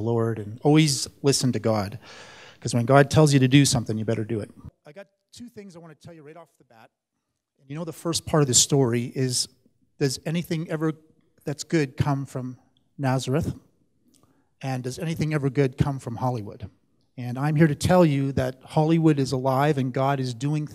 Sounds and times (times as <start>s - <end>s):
Speech: 0.0s - 2.0s, 2.6s - 7.0s, 7.6s - 13.6s, 14.6s - 20.7s.